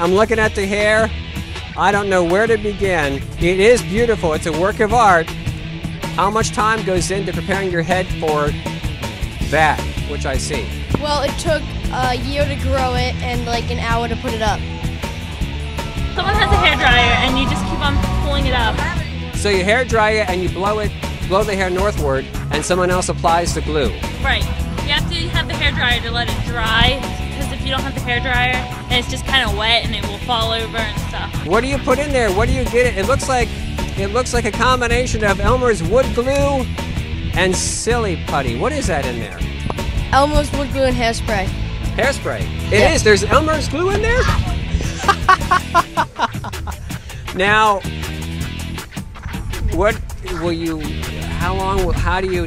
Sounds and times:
Music: 0.0s - 52.4s
Speech: 16.2s - 33.4s, 37.4s - 39.4s, 41.3s - 44.4s, 47.4s - 47.8s, 49.7s - 52.4s.

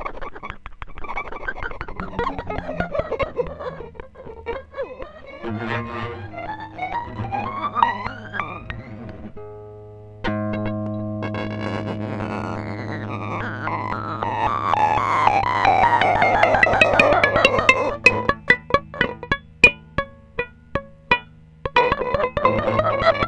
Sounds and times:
Musical instrument: 10.3s - 23.2s
Cacophony: 11.2s - 19.8s.

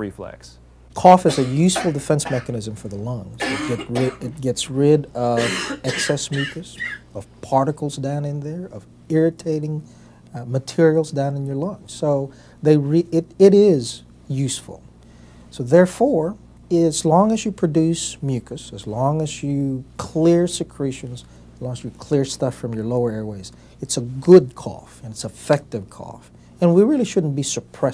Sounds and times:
Speech: 0.0s - 14.9s, 15.5s - 27.9s
Throat clearing: 1.3s - 2.6s, 3.4s - 4.4s, 5.4s - 7.1s.

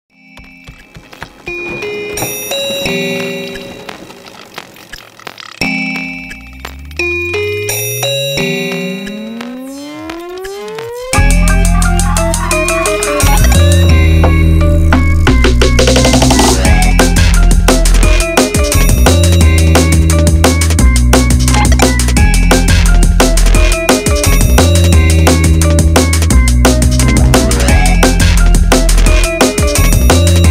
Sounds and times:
Music: 0.1s - 30.5s.

